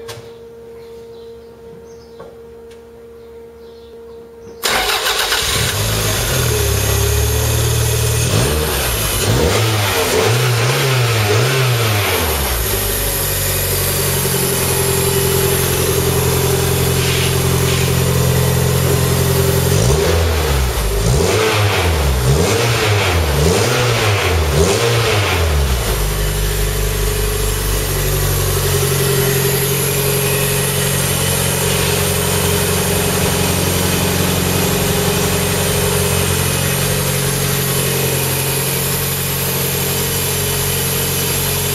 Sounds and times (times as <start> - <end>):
Medium engine (mid frequency): 4.5 - 41.7
Car: 4.6 - 41.7.